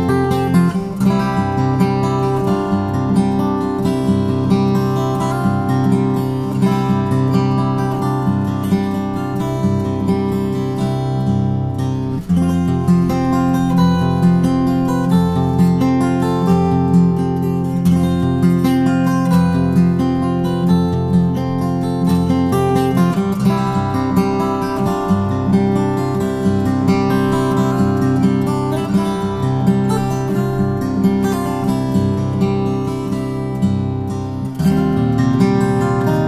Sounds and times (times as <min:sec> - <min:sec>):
Acoustic guitar: 0:00.0 - 0:36.2
Strum: 0:00.0 - 0:36.2.